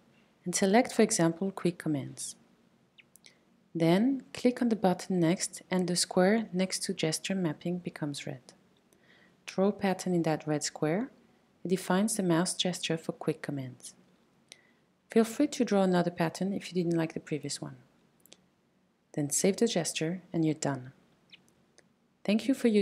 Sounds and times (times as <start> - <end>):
Speech: 0.5 - 2.4, 3.8 - 8.6, 9.5 - 11.1, 11.7 - 14.0, 15.1 - 17.8, 19.2 - 21.0, 22.3 - 22.8.